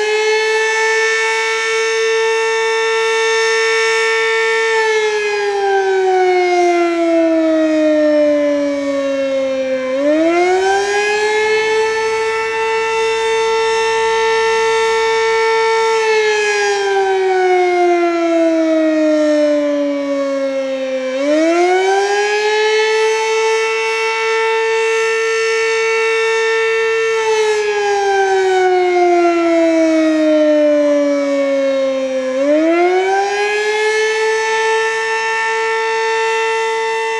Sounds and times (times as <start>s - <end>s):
Civil defense siren: 0.0s - 37.1s.